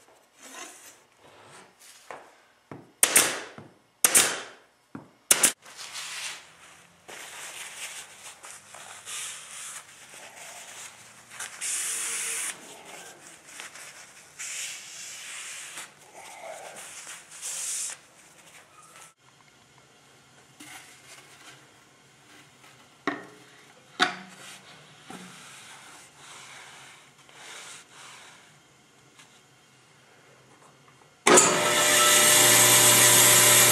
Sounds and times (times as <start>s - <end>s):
Rub: 7.2s - 19.1s, 24.4s - 28.5s.